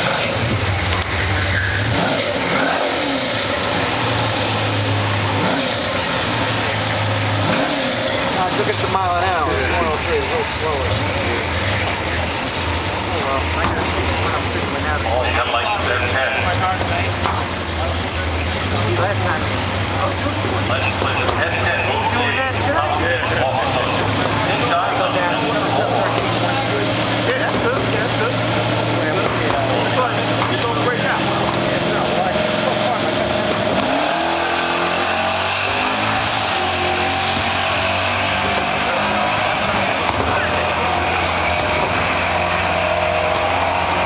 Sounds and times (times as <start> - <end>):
Accelerating, revving, vroom: 0.0 - 8.9, 23.3 - 44.0
Race car, auto racing: 0.0 - 44.0
Speech: 8.2 - 33.7, 38.2 - 41.2.